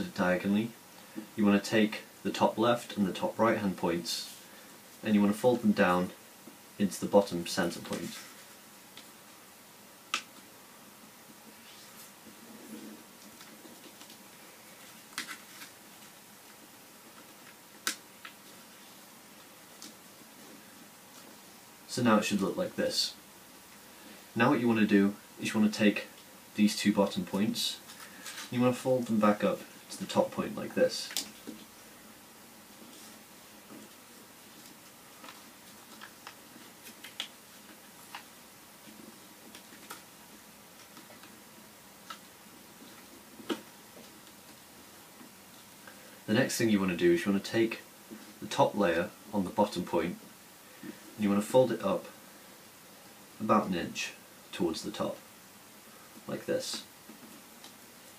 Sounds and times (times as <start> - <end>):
Speech: 0.0 - 0.8, 1.4 - 4.3, 5.0 - 6.2, 6.8 - 8.2, 21.9 - 23.2, 24.4 - 27.8, 28.5 - 31.2, 46.3 - 50.2, 51.2 - 52.2, 53.4 - 55.2, 56.3 - 56.9.